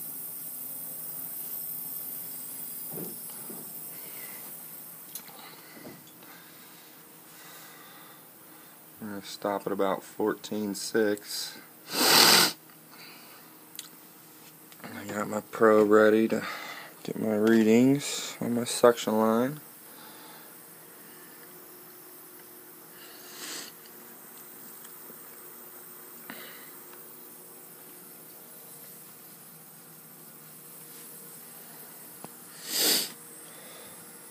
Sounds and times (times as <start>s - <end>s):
Speech: 9.0s - 11.7s, 14.8s - 19.6s.